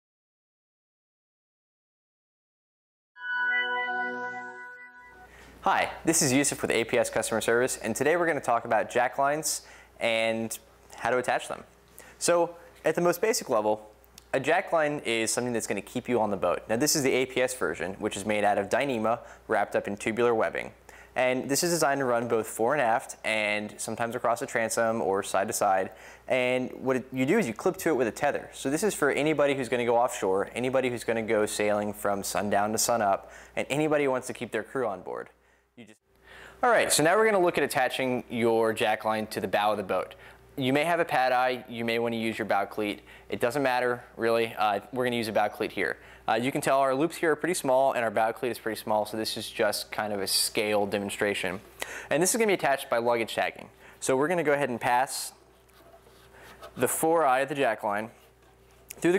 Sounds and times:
Speech: 0:05.6 - 0:36.0, 0:36.6 - 0:55.4, 0:56.8 - 0:58.2, 0:58.9 - 0:59.1.

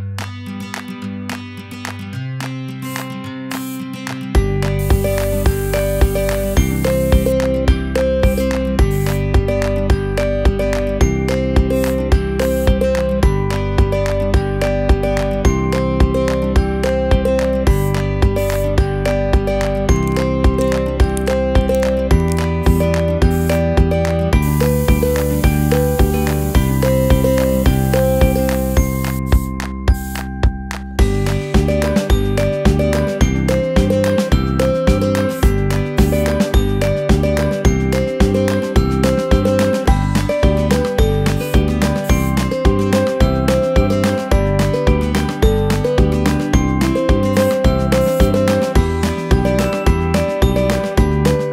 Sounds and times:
Music: 0:00.0 - 0:51.5
Spray: 0:02.9 - 0:07.4, 0:08.2 - 0:09.3, 0:11.8 - 0:12.7, 0:17.7 - 0:18.8, 0:23.3 - 0:23.7, 0:24.4 - 0:30.3, 0:34.9 - 0:36.6, 0:38.5 - 0:43.2, 0:47.3 - 0:48.8.

